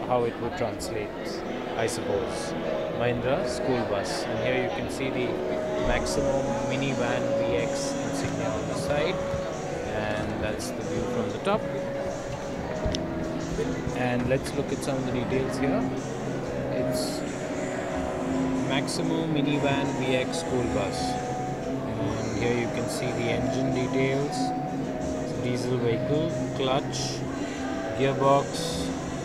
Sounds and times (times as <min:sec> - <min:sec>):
Speech: 0:00.0 - 0:09.2, 0:09.9 - 0:11.7, 0:14.0 - 0:15.9, 0:18.7 - 0:21.2, 0:21.9 - 0:24.5, 0:28.0 - 0:28.9
Music: 0:00.0 - 0:29.2.